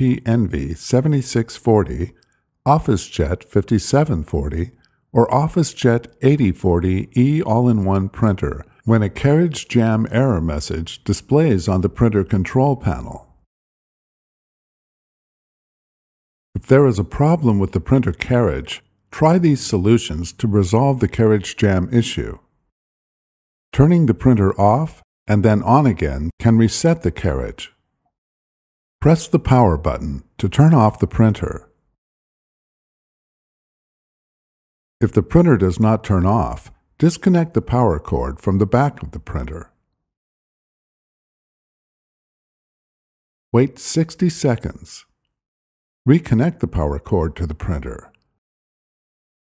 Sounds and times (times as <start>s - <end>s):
Speech: 0.0s - 13.4s, 16.6s - 22.4s, 23.7s - 27.8s, 29.0s - 31.7s, 35.0s - 39.8s, 43.6s - 45.1s, 46.1s - 48.2s.